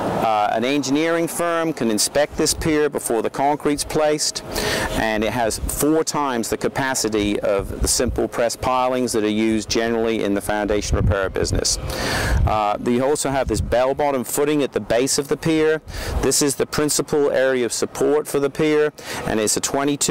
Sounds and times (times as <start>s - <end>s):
Speech: 0.2s - 4.4s, 5.0s - 11.8s, 12.5s - 20.1s.